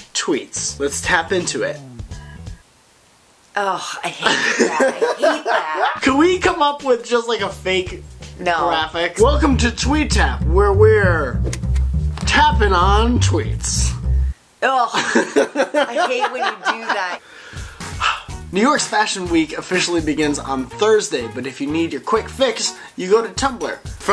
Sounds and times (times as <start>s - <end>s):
Speech: 0.0s - 2.1s, 3.6s - 4.4s, 5.8s - 11.4s, 12.2s - 15.1s, 15.8s - 17.2s, 18.5s - 24.1s
Music: 0.6s - 2.6s, 6.0s - 14.4s, 17.5s - 24.1s.